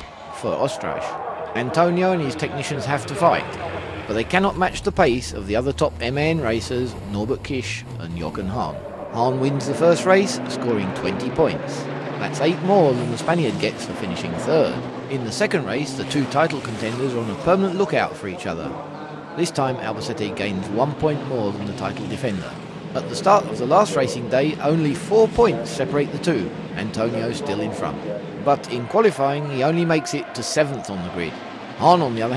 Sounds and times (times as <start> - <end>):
Truck: 0.0 - 29.0
Speech: 0.0 - 32.3.